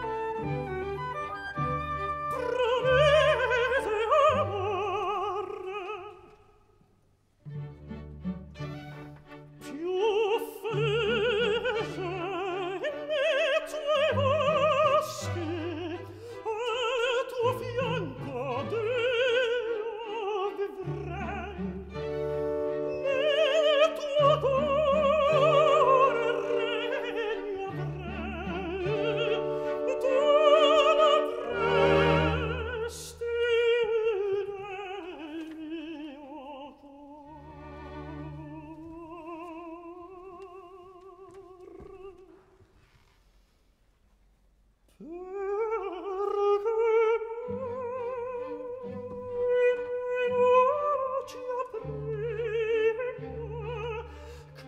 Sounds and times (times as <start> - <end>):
Opera: 0.0 - 44.1, 44.8 - 54.6.